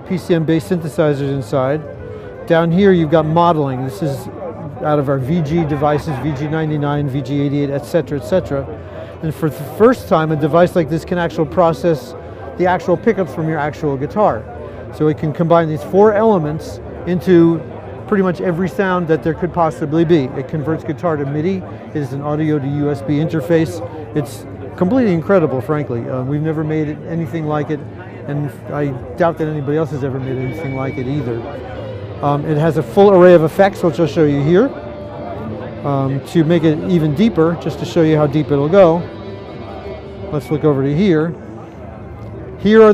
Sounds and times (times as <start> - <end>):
Speech: 0.0 - 42.9.